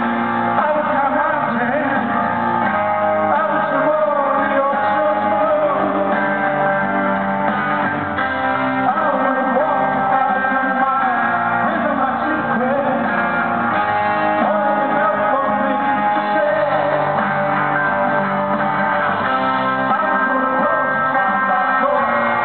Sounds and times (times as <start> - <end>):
Pop music: 0.0 - 22.4.